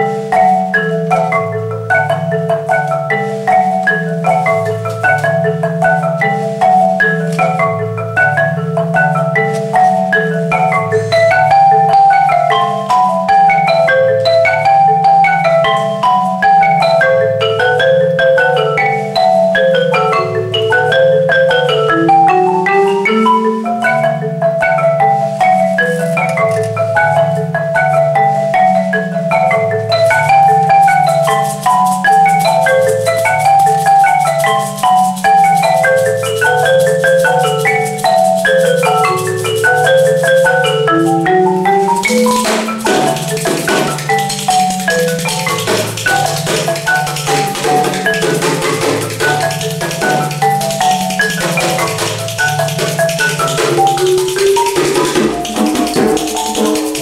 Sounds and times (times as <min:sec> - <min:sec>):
Music: 0:00.0 - 0:57.0.